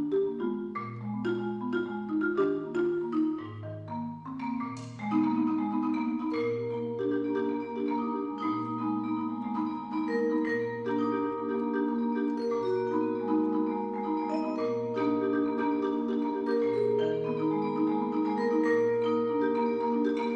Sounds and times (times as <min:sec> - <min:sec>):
Marimba, xylophone: 0:00.0 - 0:20.3
Vibraphone: 0:00.0 - 0:20.3.